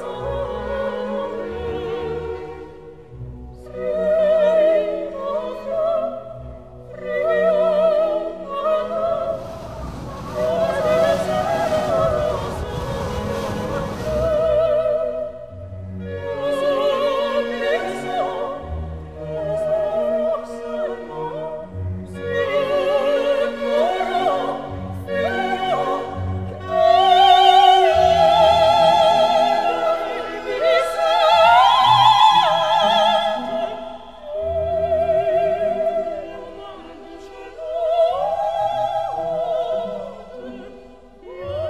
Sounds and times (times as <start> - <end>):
Opera: 0.0 - 41.6.